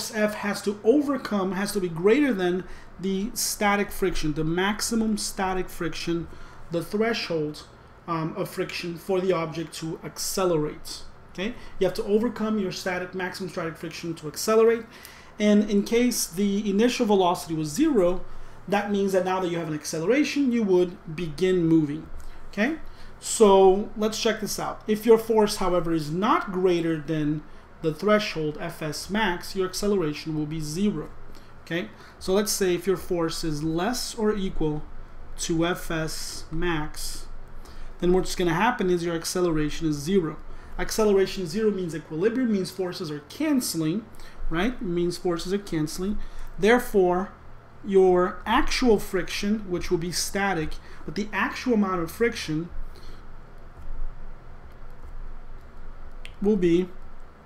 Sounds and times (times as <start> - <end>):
Speech: 0.0 - 37.4, 38.0 - 52.8, 56.3 - 57.0.